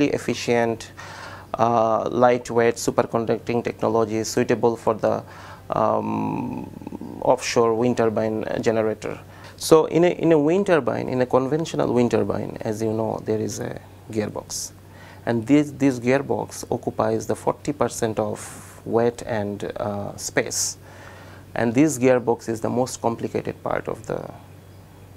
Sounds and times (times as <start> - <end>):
Speech: 0.0 - 1.0, 1.6 - 20.8, 21.6 - 24.4.